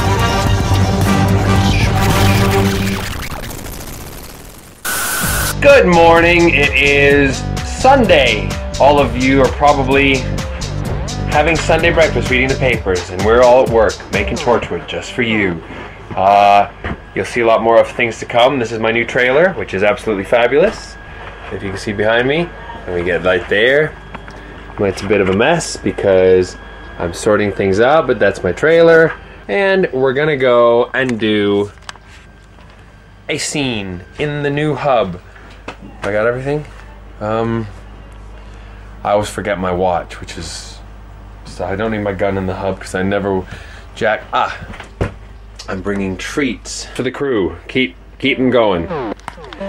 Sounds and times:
Speech: 0:05.6 - 0:10.3, 0:11.3 - 0:24.0, 0:24.8 - 0:31.8, 0:33.3 - 0:35.2, 0:35.8 - 0:37.8, 0:39.0 - 0:40.9, 0:41.5 - 0:44.7, 0:45.6 - 0:49.6.

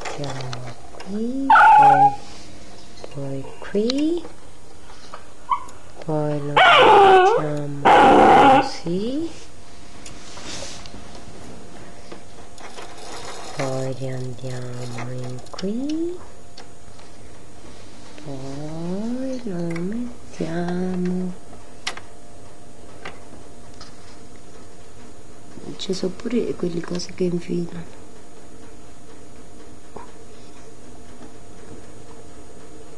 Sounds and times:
Speech: 0:00.1 - 0:02.2, 0:03.2 - 0:04.3, 0:06.0 - 0:08.0, 0:08.6 - 0:09.4, 0:13.6 - 0:16.2, 0:18.2 - 0:21.4, 0:25.6 - 0:27.9.

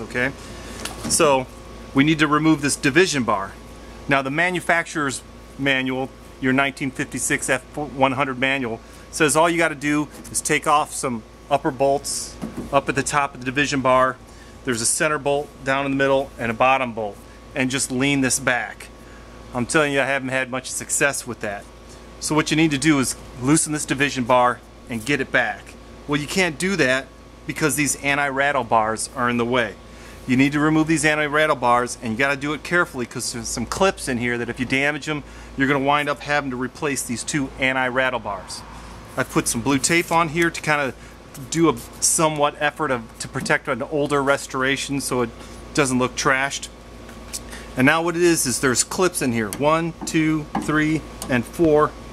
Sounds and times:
Speech: 0:00.0 - 0:00.4, 0:01.0 - 0:18.9, 0:19.5 - 0:46.7, 0:47.8 - 0:52.0.

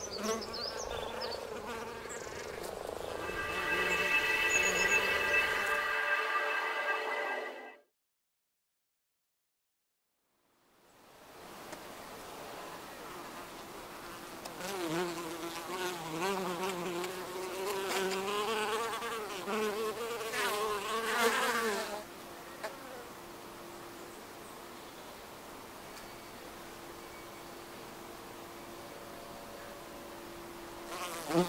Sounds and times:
Fly, housefly: 0:00.0 - 0:05.7, 0:14.4 - 0:23.1, 0:30.8 - 0:31.4
Bee, wasp, etc.: 0:00.0 - 0:05.8, 0:12.5 - 0:24.6, 0:29.3 - 0:31.4.

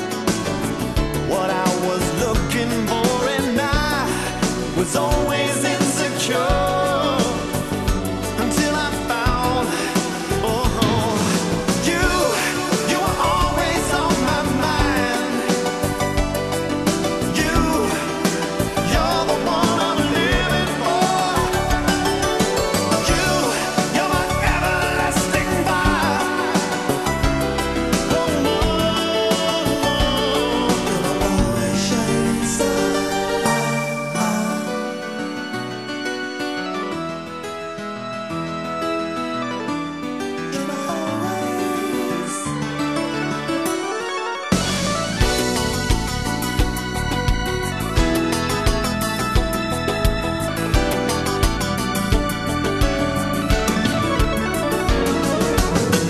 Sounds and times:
Harpsichord: 0:00.0 - 0:56.1.

